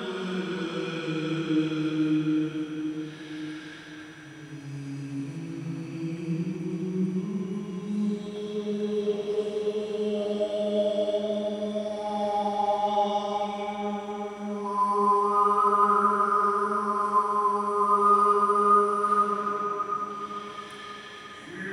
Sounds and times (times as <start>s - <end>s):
Music: 0.0s - 21.7s.